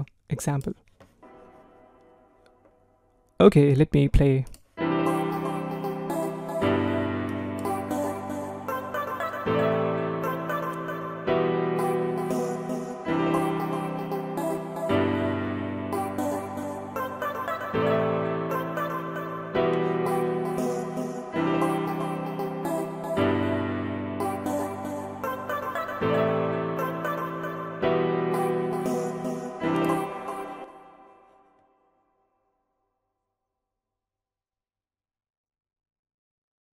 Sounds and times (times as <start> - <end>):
Music: 1.2 - 3.2, 4.8 - 32.3.